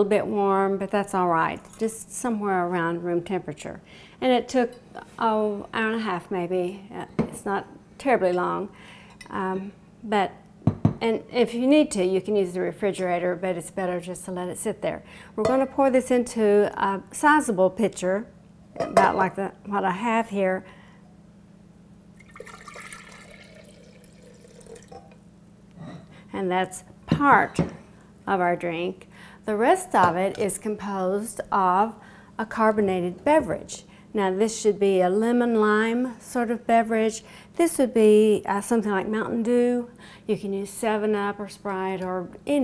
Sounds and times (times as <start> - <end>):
Speech: 0.0 - 8.7, 11.0 - 18.3, 18.9 - 20.6, 26.4 - 27.7, 28.3 - 42.6
Liquid: 22.2 - 25.2.